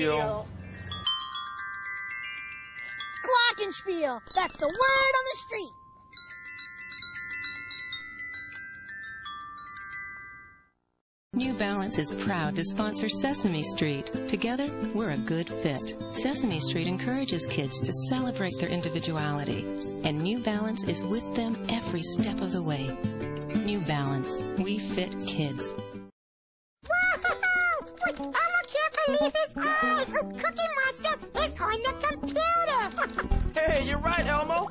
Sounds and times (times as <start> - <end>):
Glockenspiel: 0.1 - 10.8
Speech: 11.4 - 23.0, 23.6 - 25.7, 33.6 - 34.7.